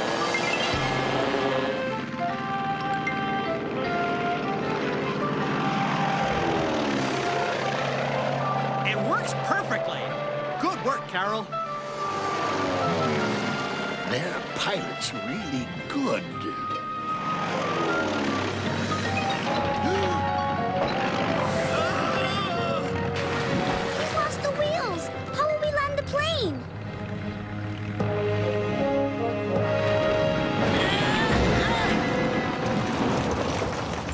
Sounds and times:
Music: 0:00.0 - 0:33.6.

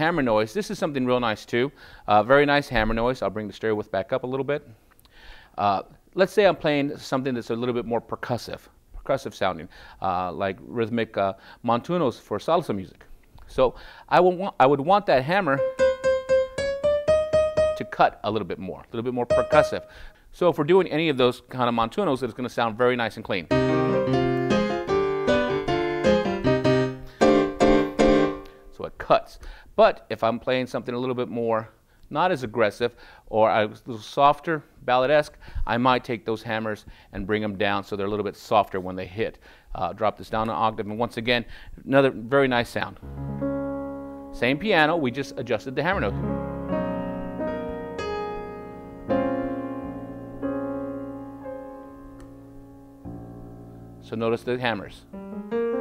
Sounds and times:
Speech: 0:00.0 - 0:04.7, 0:05.6 - 0:15.6, 0:17.8 - 0:19.8, 0:20.4 - 0:23.5, 0:28.8 - 0:43.0, 0:44.4 - 0:46.2, 0:54.1 - 0:55.1
Piano: 0:15.4 - 0:18.3, 0:19.1 - 0:20.1, 0:23.5 - 0:28.8, 0:43.0 - 0:55.8.

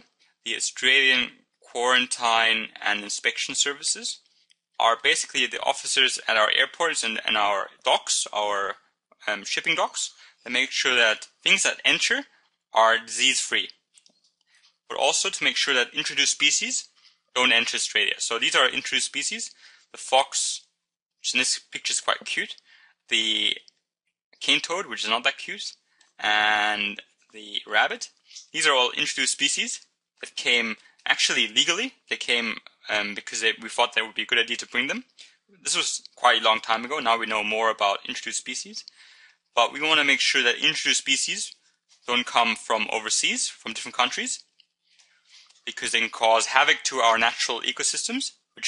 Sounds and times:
Speech: 0:00.0 - 0:13.8, 0:14.9 - 0:23.7, 0:24.4 - 0:44.6, 0:45.5 - 0:48.6.

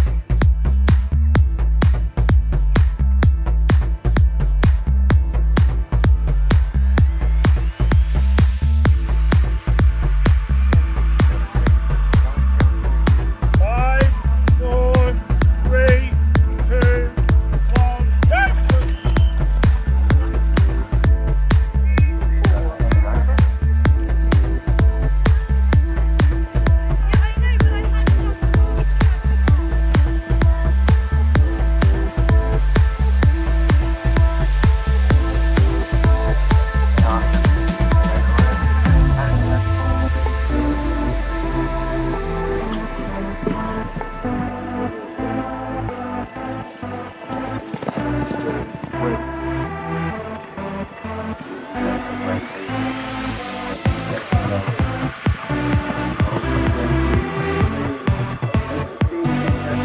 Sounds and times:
Music: 0:00.0 - 0:59.8.

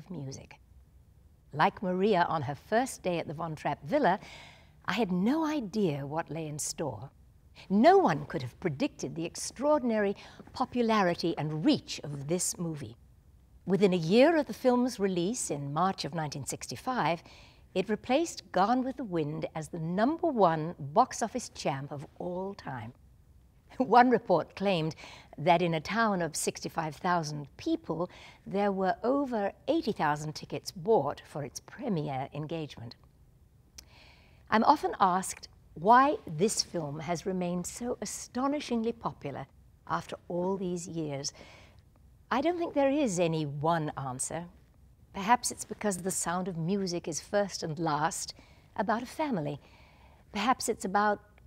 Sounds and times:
Speech: 0:00.0 - 0:00.6, 0:01.6 - 0:04.2, 0:04.9 - 0:07.1, 0:07.7 - 0:13.0, 0:13.7 - 0:17.2, 0:17.8 - 0:23.0, 0:23.8 - 0:33.0, 0:34.5 - 0:41.4, 0:42.3 - 0:44.6, 0:45.2 - 0:49.6, 0:50.4 - 0:51.3.

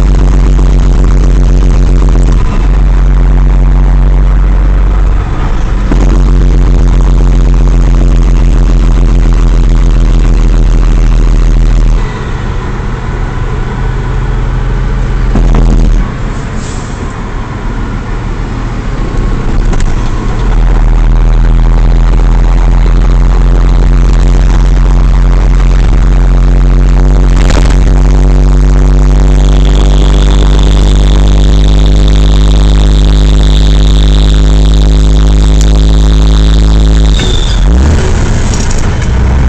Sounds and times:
Truck: 0:00.0 - 0:39.4.

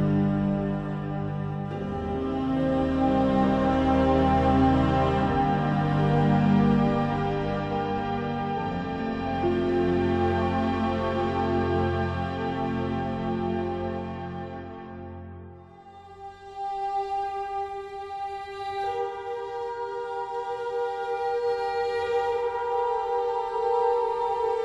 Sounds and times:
Tender music: 0:00.0 - 0:24.6.

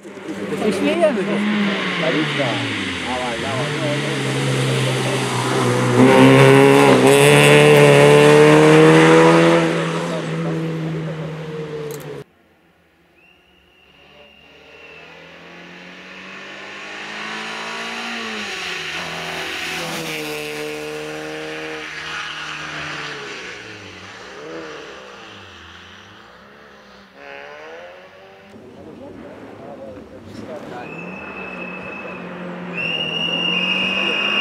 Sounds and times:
Car passing by: 0:00.0 - 0:12.3, 0:14.0 - 0:34.4
Speech: 0:00.2 - 0:05.4, 0:28.6 - 0:31.2.

